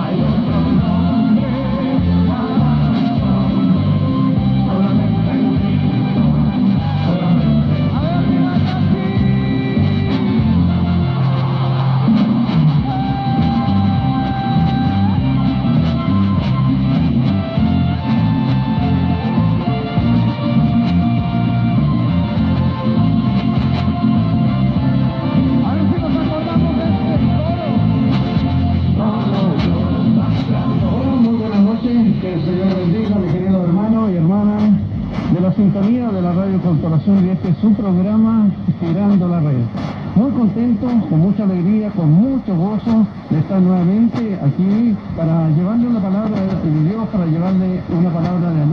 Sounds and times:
Music: 0.0s - 38.8s
Radio: 6.3s - 21.0s, 22.2s - 48.7s.

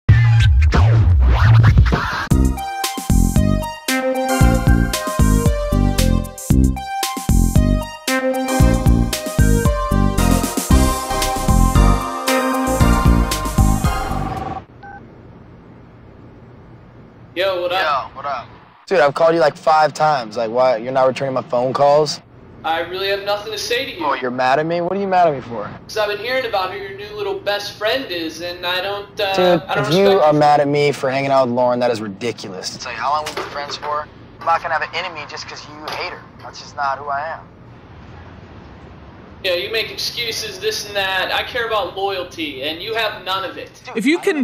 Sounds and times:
Music: 0.1s - 14.6s.

